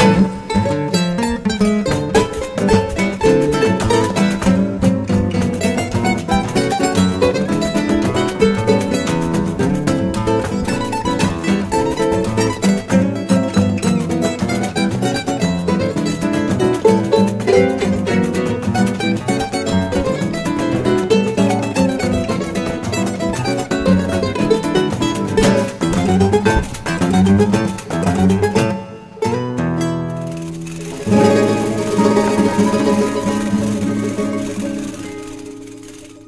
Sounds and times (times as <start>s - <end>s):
Guitar: 0.0s - 36.2s.